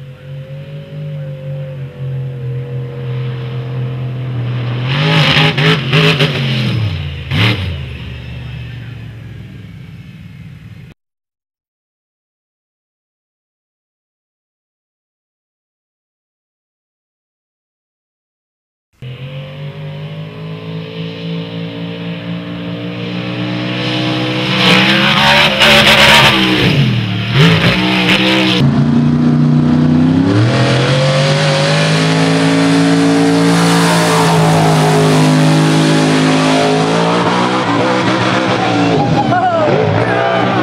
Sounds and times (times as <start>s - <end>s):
Truck: 0.0s - 11.0s, 19.0s - 40.6s.